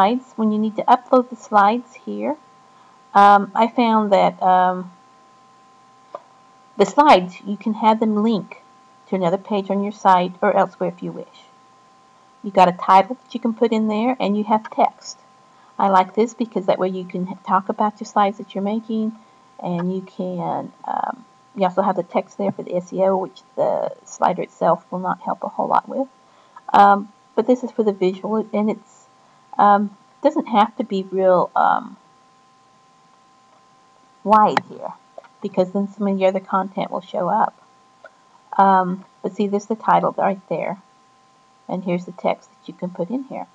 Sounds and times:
Narration, monologue: 0.0s - 43.5s.

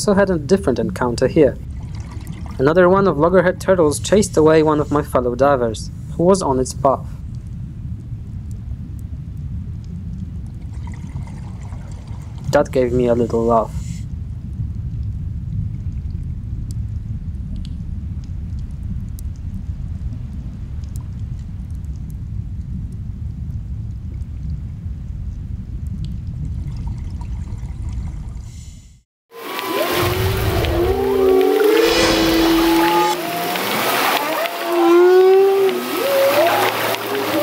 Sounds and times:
Whale vocalization: 29.4s - 37.4s.

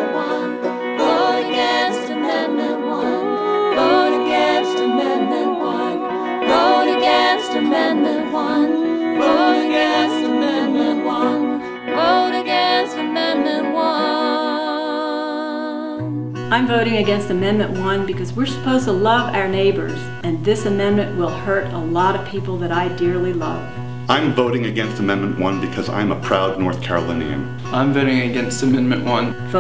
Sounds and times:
Music: 0.0s - 29.6s.

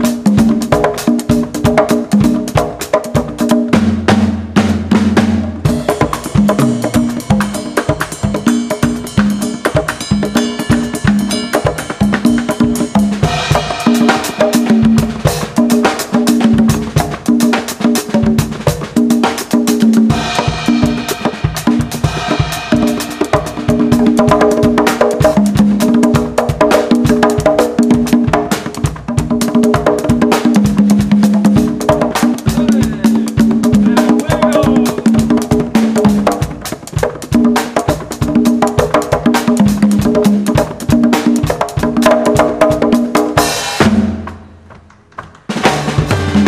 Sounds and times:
Music of Latin America: 0.0s - 46.4s
Musical instrument: 6.0s - 14.8s, 45.7s - 46.4s.

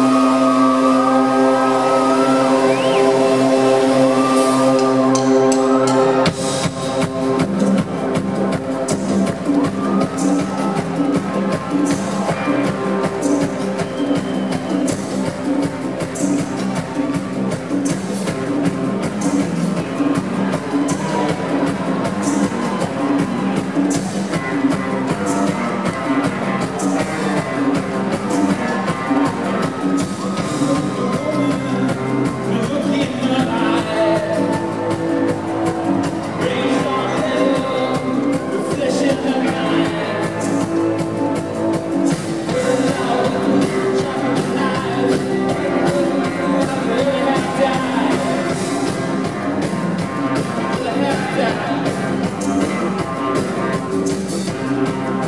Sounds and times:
Music: 0.0s - 55.2s.

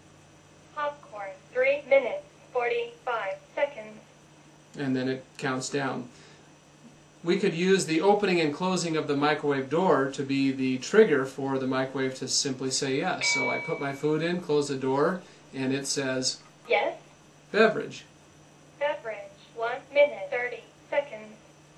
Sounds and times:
Speech: 0.8s - 4.0s, 4.8s - 6.1s, 7.2s - 18.1s, 18.8s - 21.4s.

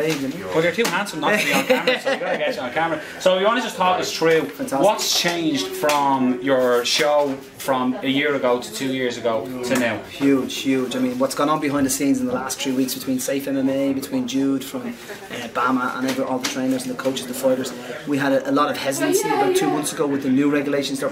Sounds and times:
Speech: 2.3s - 21.1s.

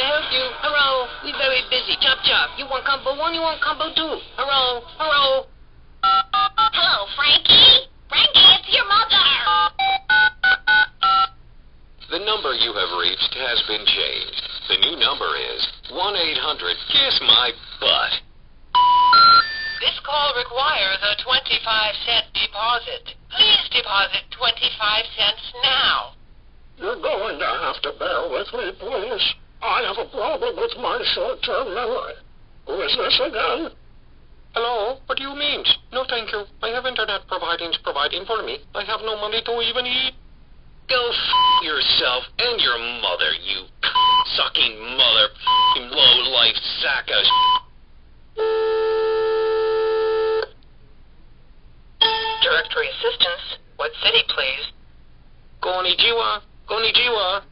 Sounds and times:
Speech: 0.0s - 5.5s, 6.8s - 9.6s, 12.0s - 18.2s, 19.8s - 26.2s, 26.8s - 33.8s, 34.6s - 40.2s, 40.9s - 47.4s, 52.4s - 54.8s, 55.6s - 57.5s
Telephone bell ringing: 6.0s - 6.7s, 9.6s - 11.4s, 18.8s - 19.8s, 52.0s - 52.7s.

